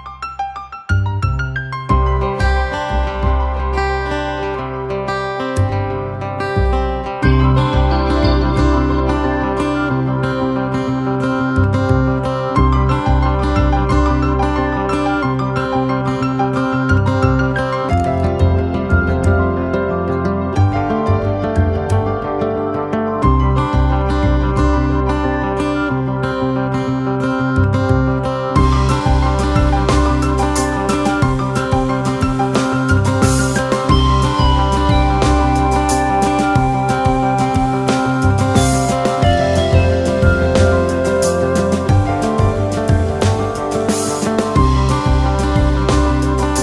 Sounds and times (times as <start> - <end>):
Music: 0.0 - 46.6.